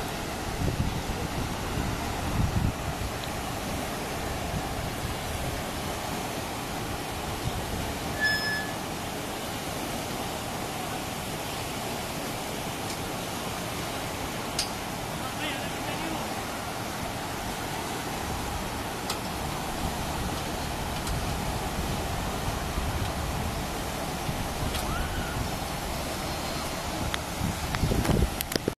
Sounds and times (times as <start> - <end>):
Waterfall: 0.0 - 28.7.